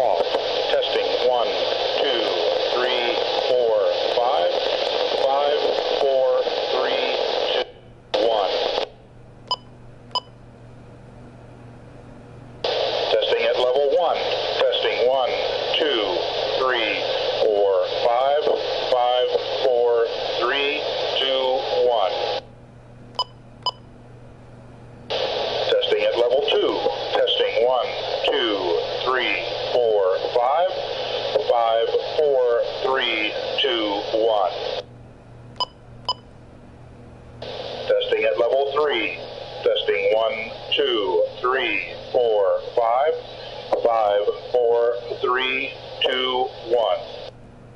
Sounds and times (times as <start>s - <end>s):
Speech: 0.0s - 8.7s, 13.1s - 22.3s, 25.7s - 34.7s, 37.9s - 47.2s.